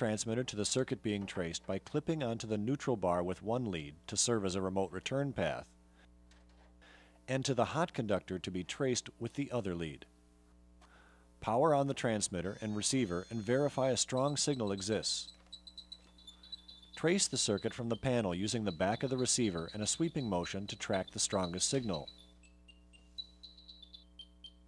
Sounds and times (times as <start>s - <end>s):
Speech: 0.0s - 5.7s, 7.3s - 10.1s, 11.4s - 15.3s, 17.0s - 22.1s.